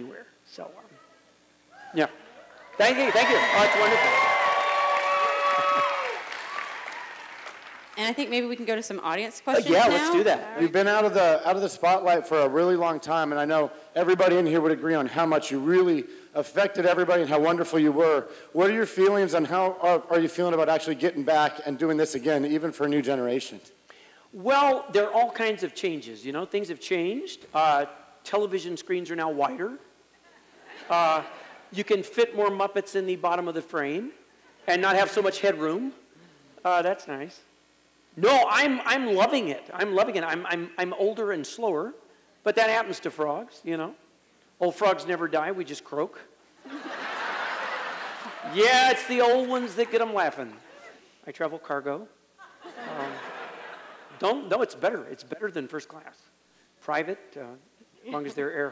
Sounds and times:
Speech: 0:09.4 - 0:23.6.

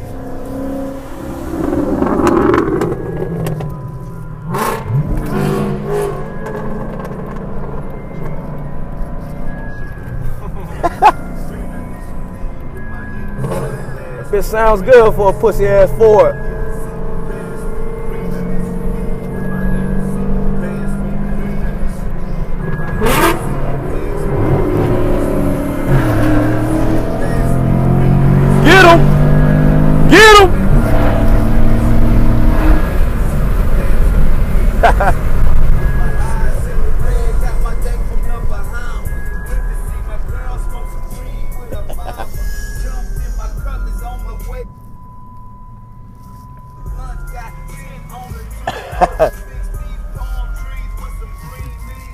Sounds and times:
Outside, rural or natural: 0:00.0 - 0:42.8
Car: 0:00.0 - 0:52.1
Music: 0:06.3 - 0:30.8, 0:35.9 - 0:45.0, 0:45.7 - 0:52.1.

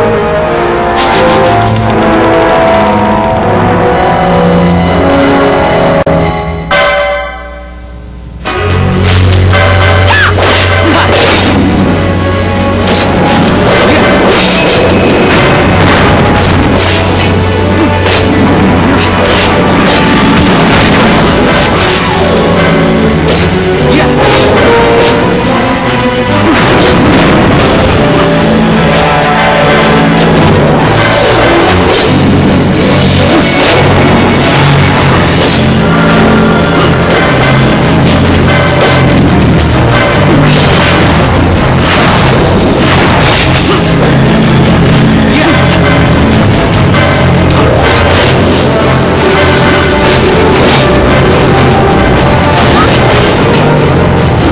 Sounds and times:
Music: 0:00.0 - 0:54.5.

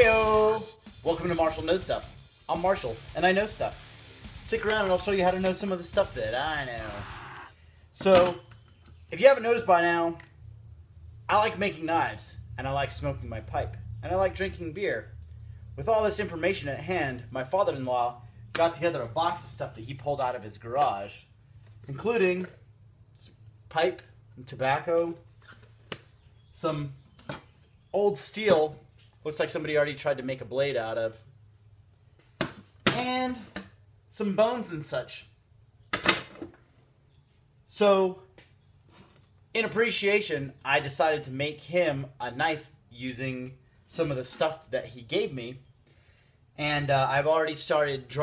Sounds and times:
Speech: 0:00.0 - 0:03.8, 0:04.4 - 0:07.1, 0:08.0 - 0:08.4, 0:09.1 - 0:10.2, 0:11.3 - 0:15.1, 0:15.8 - 0:21.3, 0:21.9 - 0:22.6, 0:23.2 - 0:25.2, 0:26.6 - 0:27.0, 0:28.0 - 0:31.3, 0:32.9 - 0:35.4, 0:37.7 - 0:38.3, 0:39.6 - 0:45.6, 0:46.6 - 0:48.2
Music: 0:00.0 - 0:07.5.

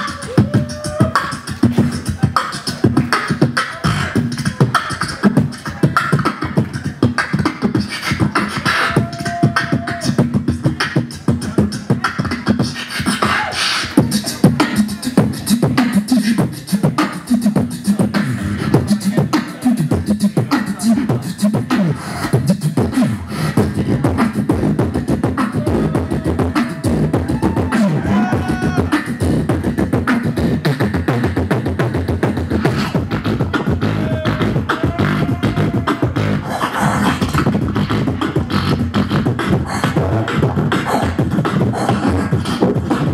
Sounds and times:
Beatboxing: 0:00.0 - 0:43.1.

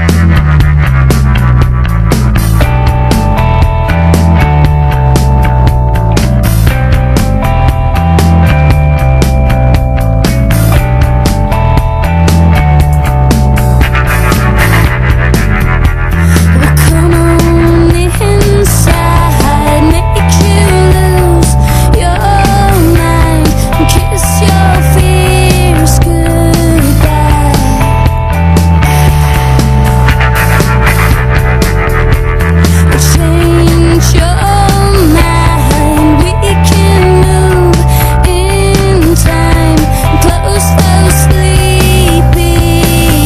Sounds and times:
Music: 0:00.0 - 0:43.2.

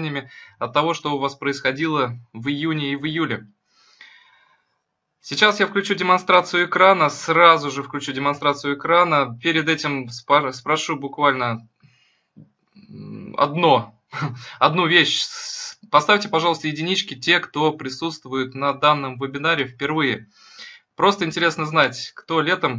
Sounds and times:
Speech: 0:00.0 - 0:03.5, 0:05.3 - 0:11.7, 0:12.8 - 0:22.7.

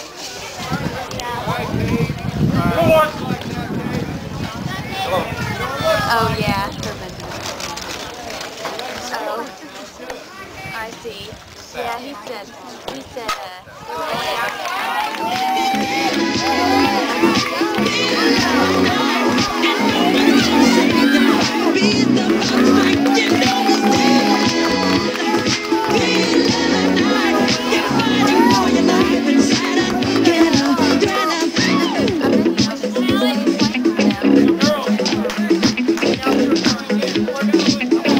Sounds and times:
Music: 0:15.2 - 0:38.1.

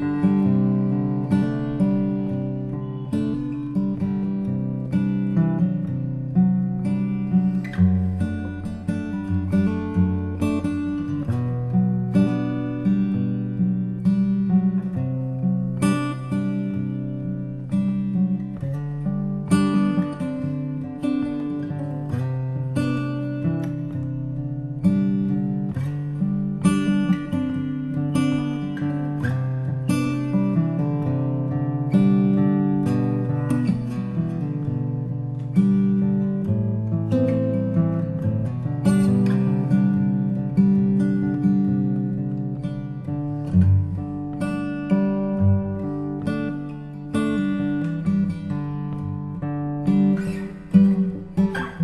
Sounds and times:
Acoustic guitar: 0:00.0 - 0:51.8
Strum: 0:00.0 - 0:51.8.

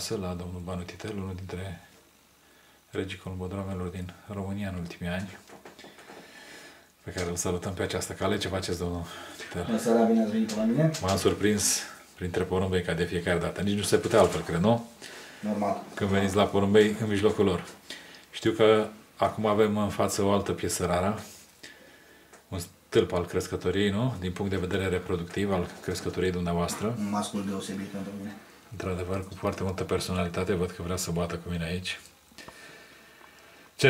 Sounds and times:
Speech: 0:00.0 - 0:01.9, 0:02.9 - 0:05.4, 0:07.0 - 0:21.3, 0:22.5 - 0:32.1
Inside, small room: 0:00.0 - 0:33.9.

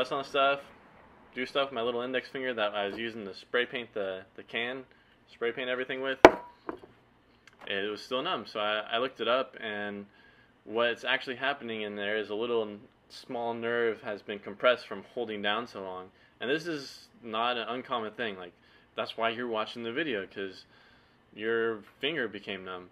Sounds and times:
Speech: 0:00.0 - 0:00.7, 0:01.4 - 0:06.3, 0:07.5 - 0:10.1, 0:10.7 - 0:20.7, 0:21.4 - 0:22.9.

